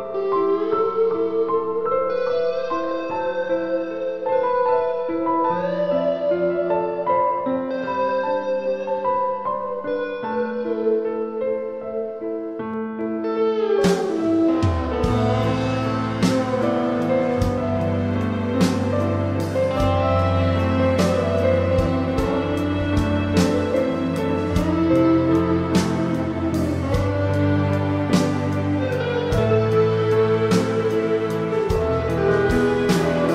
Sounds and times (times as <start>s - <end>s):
Blues: 0.0s - 33.3s.